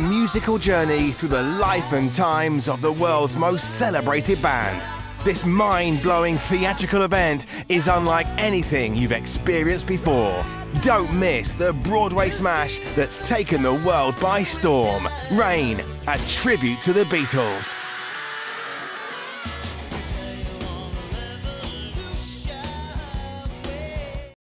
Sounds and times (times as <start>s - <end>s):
Speech: 0.0s - 17.8s
Music: 0.0s - 24.4s.